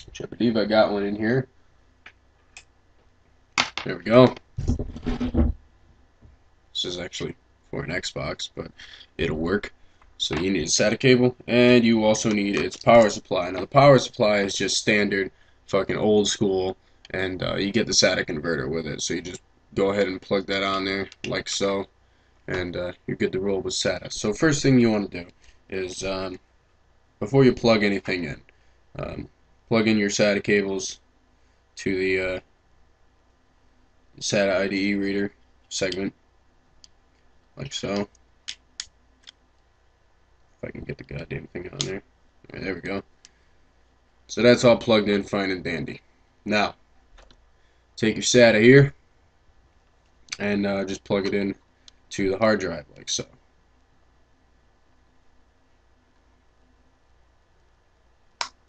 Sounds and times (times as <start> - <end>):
Speech: 0.0 - 1.5, 3.8 - 4.4, 6.8 - 21.9, 22.5 - 26.4, 27.2 - 28.4, 29.0 - 31.0, 31.8 - 32.5, 34.2 - 36.2, 37.6 - 38.1, 40.6 - 43.1, 44.3 - 46.8, 48.0 - 49.0, 50.4 - 53.4
Inside, small room: 0.0 - 58.6.